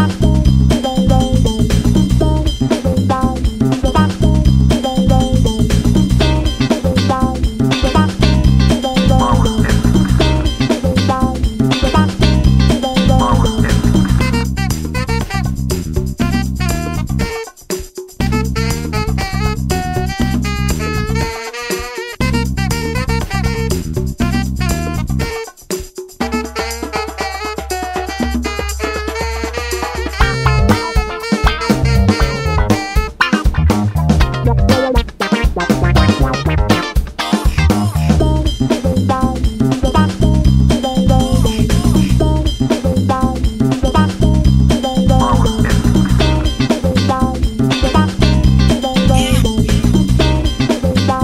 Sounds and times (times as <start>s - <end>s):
Music: 0.0s - 51.2s.